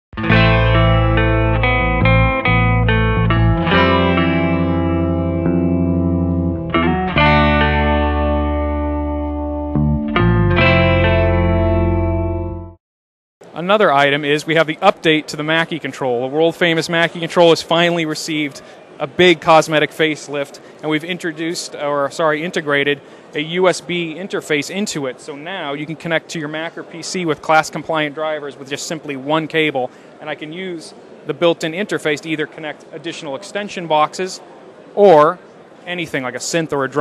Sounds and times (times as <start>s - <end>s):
Electronic music: 0.2s - 12.8s
Musical instrument: 0.2s - 12.8s.